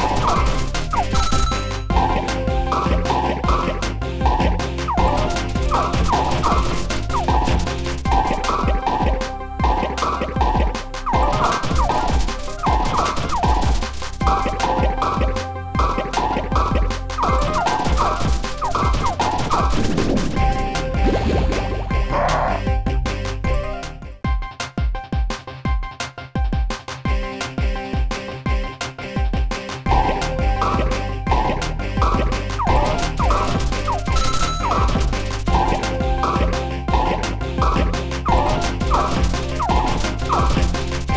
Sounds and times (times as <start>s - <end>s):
Music: 0.0s - 41.1s.